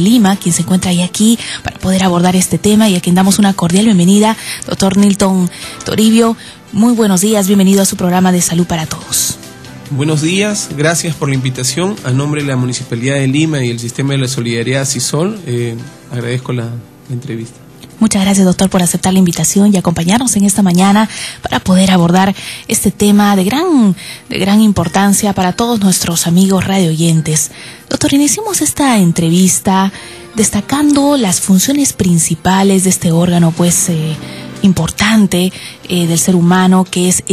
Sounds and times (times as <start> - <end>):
Music: 0.0 - 37.3.